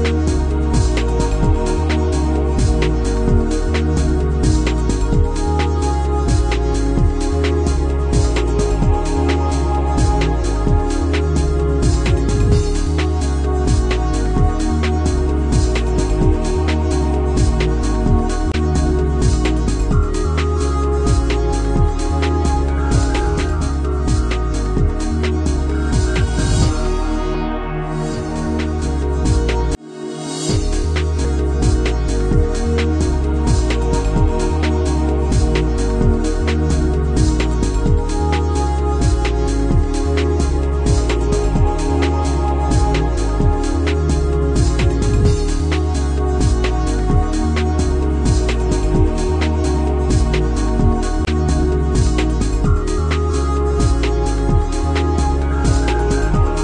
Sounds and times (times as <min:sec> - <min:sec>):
Music: 0:00.0 - 0:56.6.